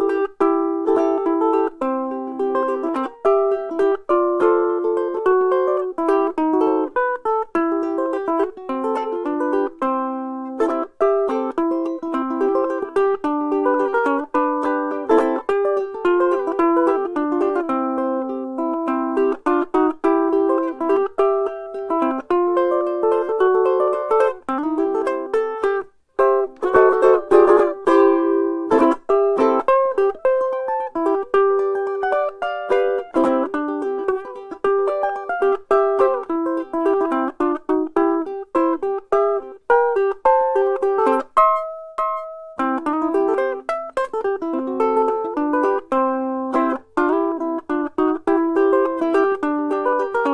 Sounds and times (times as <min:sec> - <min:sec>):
Music: 0:00.0 - 0:50.3.